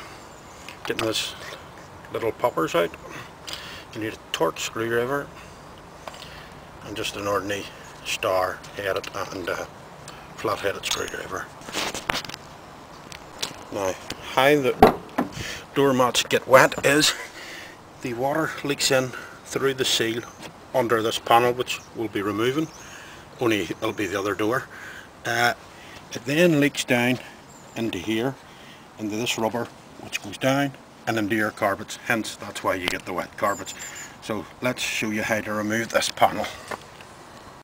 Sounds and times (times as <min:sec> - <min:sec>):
Speech: 0:00.8 - 0:01.5, 0:02.1 - 0:03.2, 0:03.9 - 0:05.3, 0:06.8 - 0:09.7, 0:10.4 - 0:11.6, 0:13.7 - 0:14.8, 0:15.7 - 0:17.2, 0:18.0 - 0:22.7, 0:23.4 - 0:28.4, 0:29.0 - 0:36.7
Door: 0:14.8 - 0:15.4.